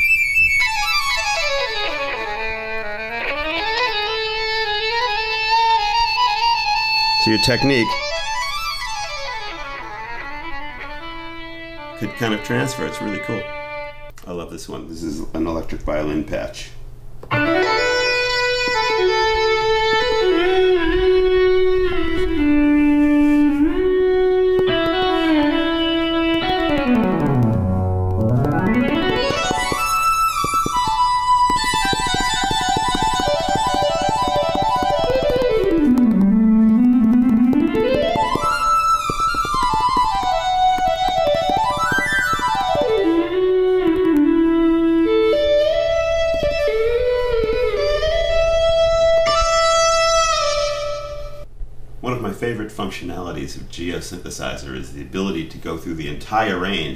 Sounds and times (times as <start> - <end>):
Music: 0.0 - 14.2, 17.3 - 51.5
Speech: 7.2 - 8.0, 12.0 - 13.5, 14.2 - 16.8, 52.0 - 56.9.